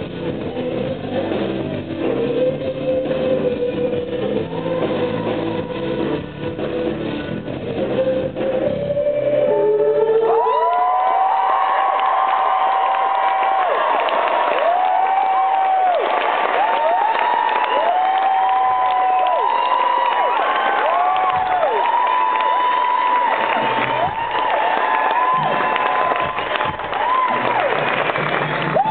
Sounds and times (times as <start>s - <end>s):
Music: 0.0s - 11.5s, 20.9s - 28.9s.